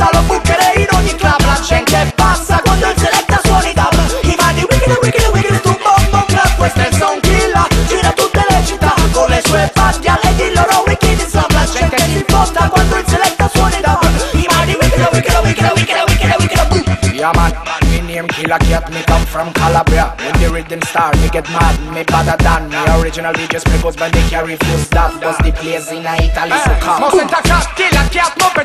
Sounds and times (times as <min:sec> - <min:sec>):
Afrobeat: 0:00.0 - 0:28.6
Reggae: 0:00.0 - 0:28.6.